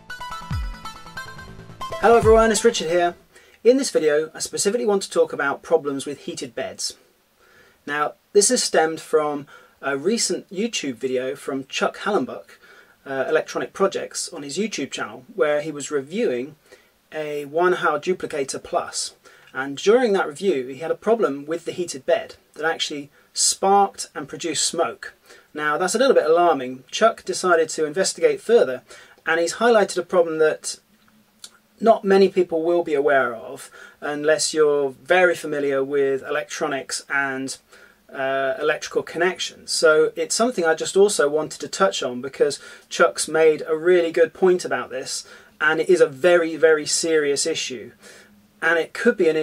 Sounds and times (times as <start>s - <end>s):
Speech: 2.0s - 7.0s, 7.9s - 30.9s, 31.5s - 48.0s, 48.6s - 49.4s.